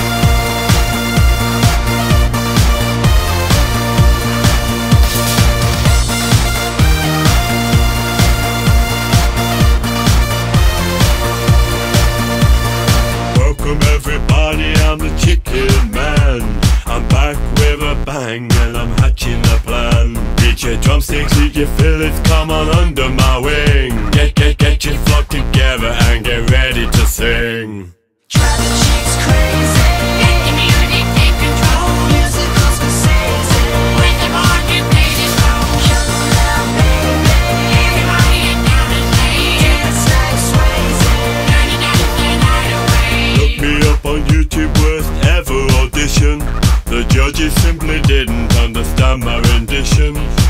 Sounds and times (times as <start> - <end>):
Music: 0.0 - 27.4, 28.3 - 50.4.